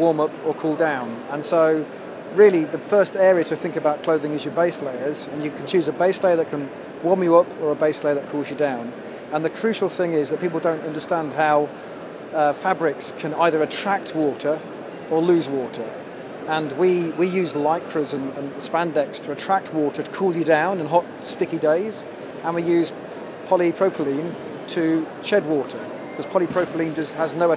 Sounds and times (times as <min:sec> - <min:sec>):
Speech: 0:00.0 - 0:11.7, 0:12.3 - 0:27.5.